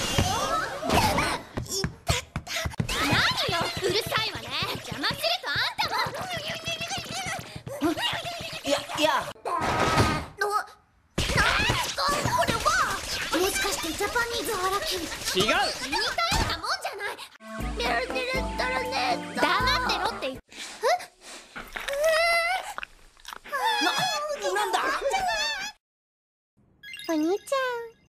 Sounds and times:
Music: 17.4s - 20.4s.

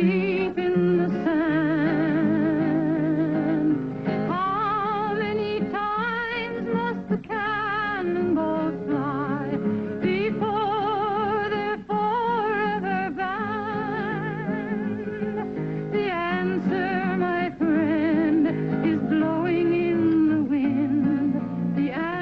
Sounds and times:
Music: 0.0s - 22.2s.

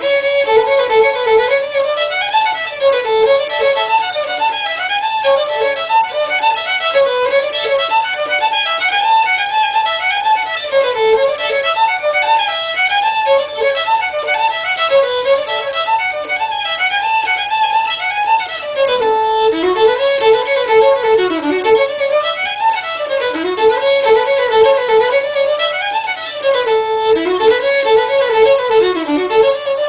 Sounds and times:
Violin, fiddle: 0.0s - 29.8s.

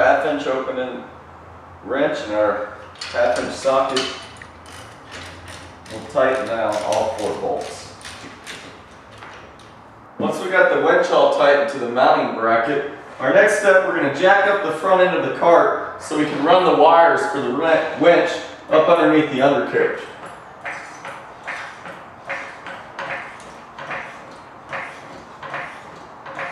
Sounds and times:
Speech: 0.0s - 1.1s, 1.8s - 4.1s, 5.9s - 7.9s, 10.2s - 20.2s.

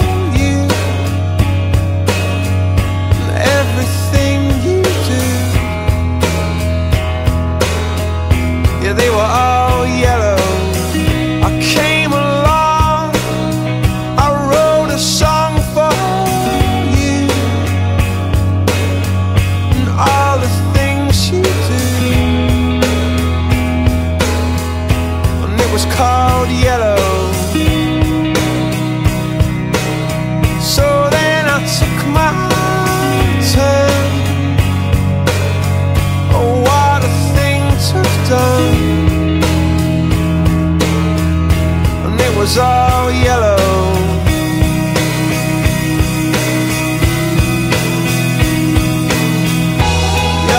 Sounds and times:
Music: 0.0s - 50.5s.

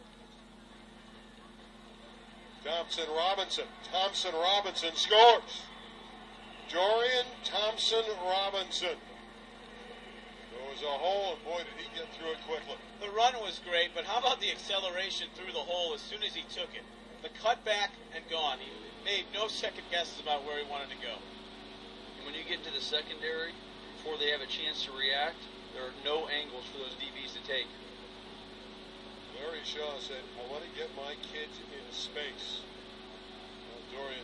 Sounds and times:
Speech: 0.6s - 5.7s, 6.7s - 9.0s, 10.5s - 21.3s, 22.2s - 27.8s, 29.3s - 32.7s, 33.7s - 34.2s.

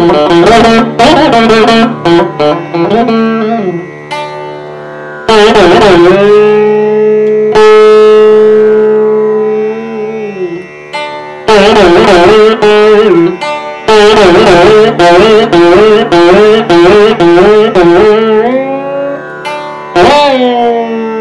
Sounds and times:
Carnatic music: 0.0s - 21.2s
Sitar: 0.0s - 21.2s.

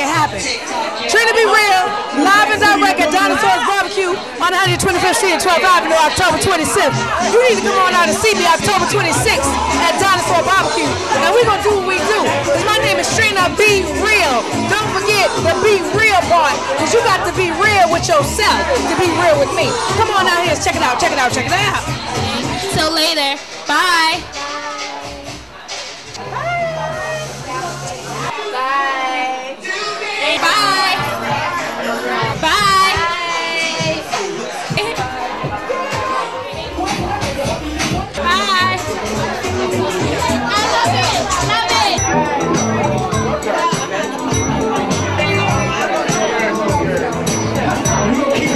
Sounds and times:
Inside, public space: 0.0s - 48.5s
Music: 0.0s - 48.5s.

